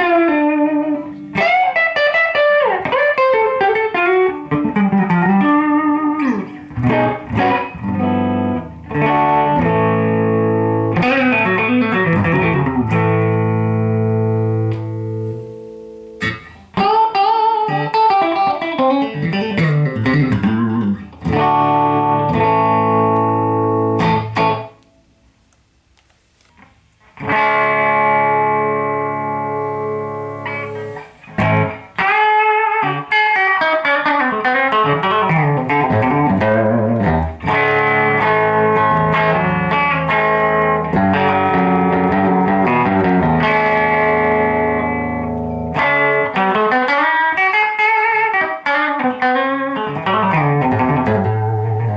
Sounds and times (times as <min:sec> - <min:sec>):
Tapping (guitar technique): 0:00.0 - 0:24.9, 0:25.5 - 0:51.9
Electric guitar: 0:00.0 - 0:51.9.